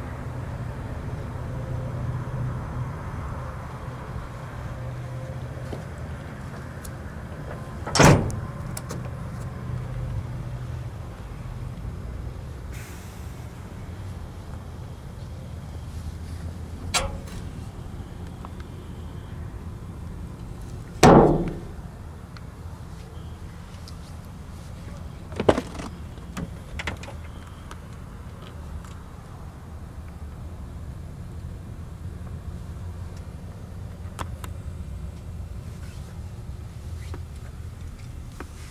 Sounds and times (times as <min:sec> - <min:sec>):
Outside, rural or natural: 0:00.0 - 0:38.7.